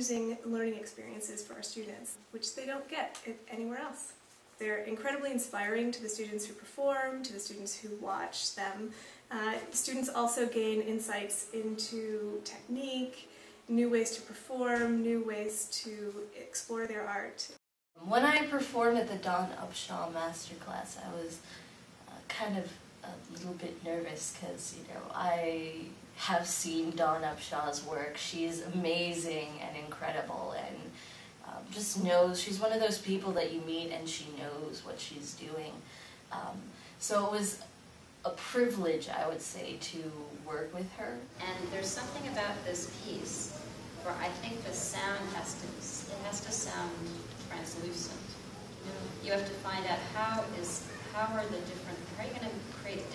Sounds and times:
Speech: 0.0 - 37.7, 38.3 - 53.1.

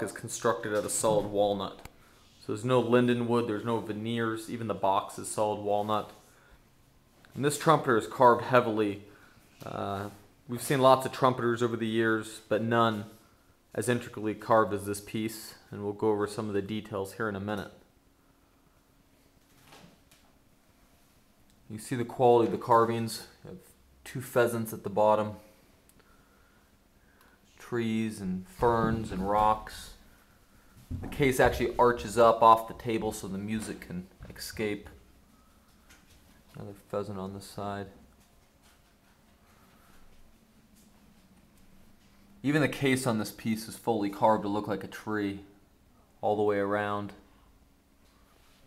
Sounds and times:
Speech: 0.0 - 6.2, 7.3 - 17.9, 21.7 - 25.5, 27.6 - 30.0, 31.0 - 35.0, 36.5 - 38.0, 42.4 - 45.6, 46.2 - 47.3.

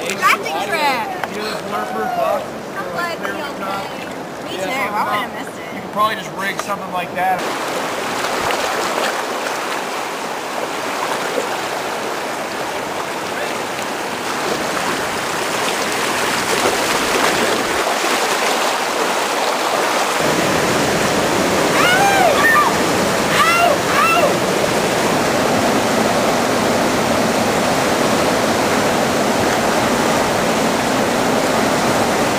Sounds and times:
Rowboat, canoe, kayak: 0.0 - 32.3
Waves, surf: 0.0 - 32.3.

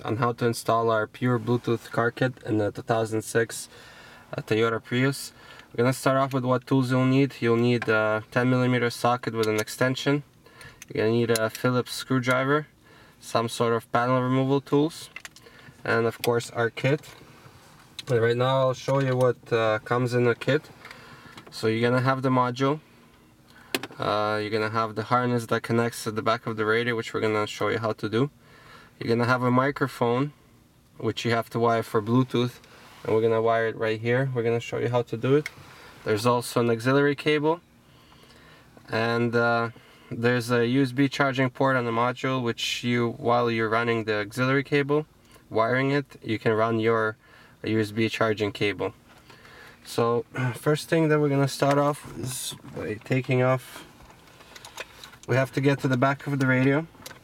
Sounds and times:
Speech: 0.0 - 3.7, 4.3 - 10.2, 10.9 - 15.1, 15.8 - 17.1, 18.0 - 20.7, 21.6 - 22.8, 24.0 - 28.3, 29.0 - 30.4, 31.0 - 35.5, 36.1 - 37.6, 38.9 - 49.0, 49.9 - 53.9, 55.3 - 56.9.

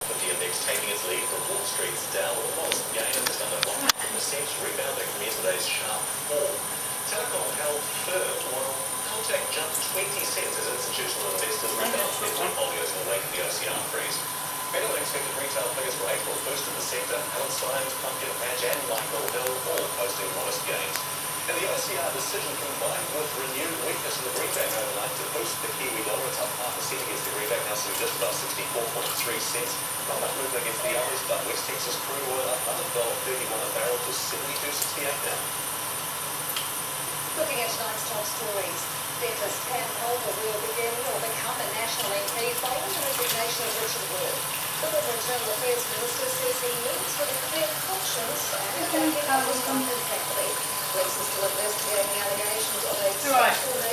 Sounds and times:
Speech: 0.0 - 35.5, 37.4 - 53.9.

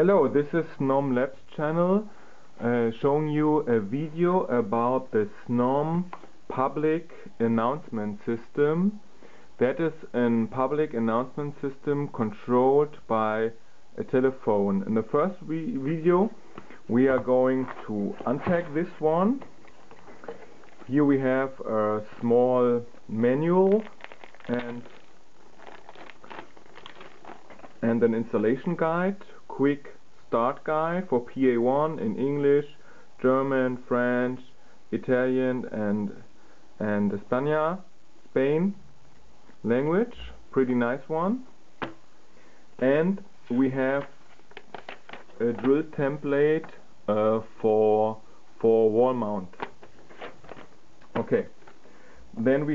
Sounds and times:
Speech: 0.0 - 9.0, 9.6 - 19.5, 20.8 - 25.0, 27.8 - 38.9, 39.6 - 41.5, 42.8 - 44.2, 45.4 - 49.6, 51.1 - 51.6, 52.4 - 52.7.

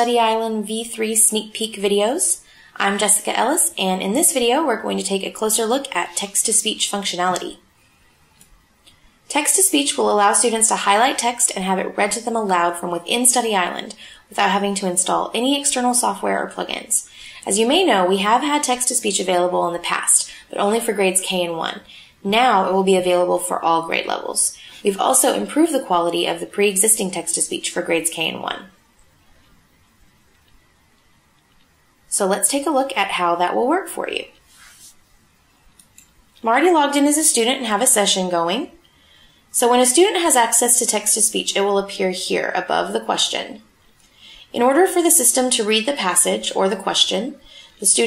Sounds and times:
Female speech, woman speaking: 0.0 - 7.6, 9.3 - 28.7, 32.1 - 34.4, 36.4 - 38.8, 39.6 - 43.6, 44.5 - 48.0
Narration, monologue: 0.0 - 48.0.

